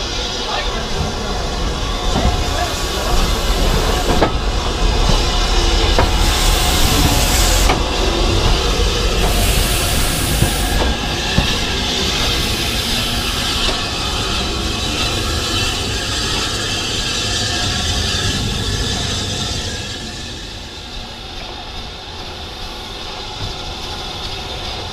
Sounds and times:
Railroad car, train wagon: 0:00.0 - 0:24.9
Train: 0:00.0 - 0:24.9.

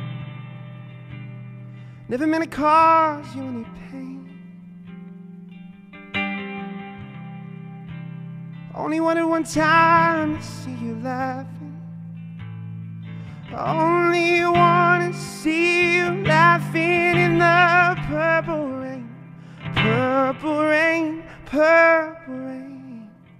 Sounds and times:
Music: 0:00.0 - 0:23.3.

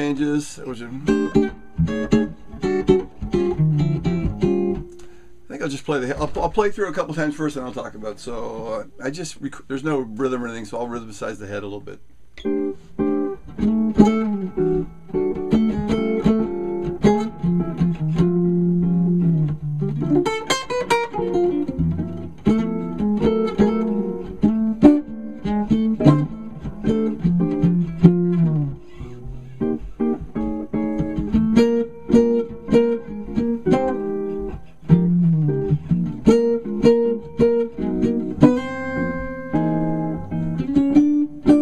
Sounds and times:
Music: 0:00.0 - 0:06.4, 0:12.4 - 0:41.6.

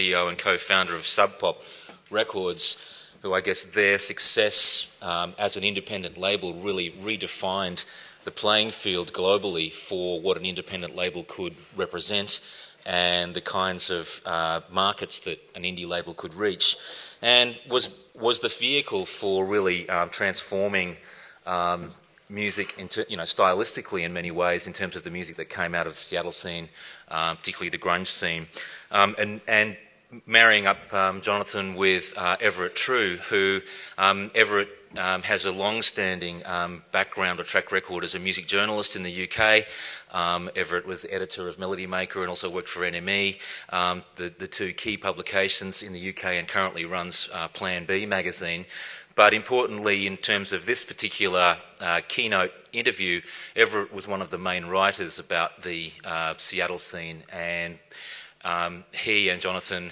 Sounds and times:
Speech: 0:00.0 - 0:59.9.

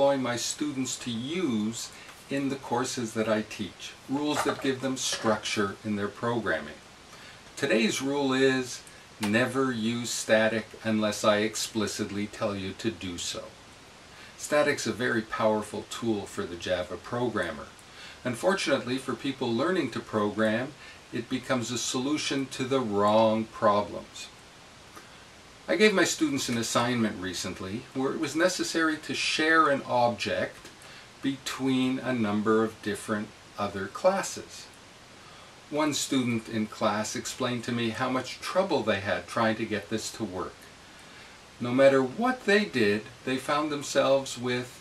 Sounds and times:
Speech: 0:00.0 - 0:06.8, 0:07.6 - 0:13.6, 0:14.4 - 0:24.4, 0:25.7 - 0:34.8, 0:35.7 - 0:40.7, 0:41.6 - 0:44.8.

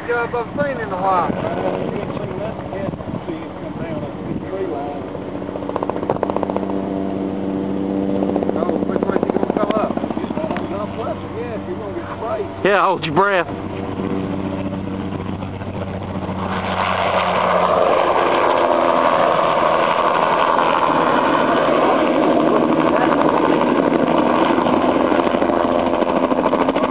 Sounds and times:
Helicopter: 0:00.0 - 0:26.9
Outside, rural or natural: 0:00.0 - 0:26.9.

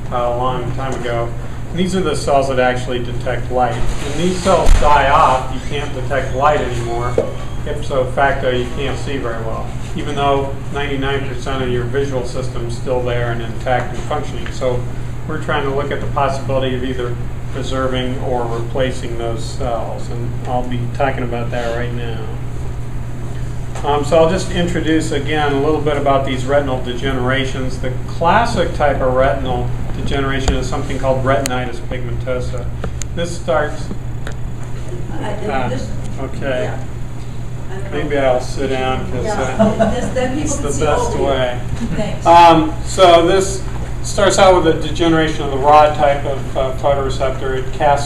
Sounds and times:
Speech: 0:00.1 - 0:22.4, 0:23.8 - 0:33.9, 0:37.8 - 0:48.0.

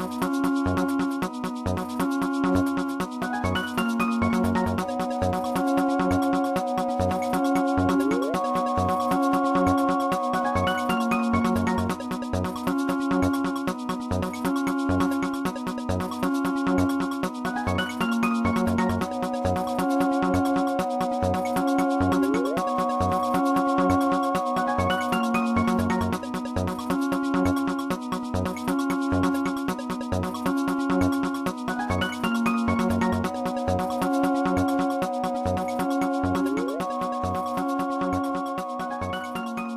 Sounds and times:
Music: 0:00.0 - 0:39.7.

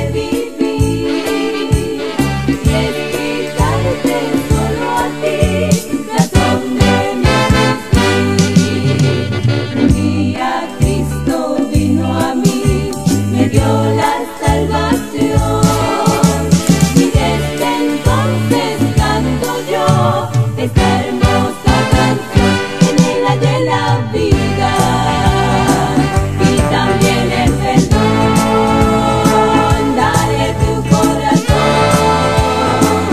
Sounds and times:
Christian music: 0:00.0 - 0:33.1
Orchestra: 0:00.0 - 0:33.1
Pop music: 0:00.0 - 0:33.1
Soul music: 0:00.0 - 0:33.1.

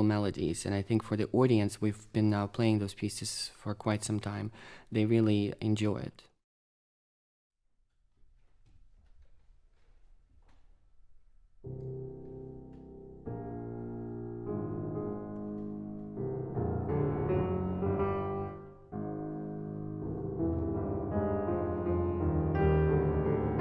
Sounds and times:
Music: 0:11.6 - 0:23.6.

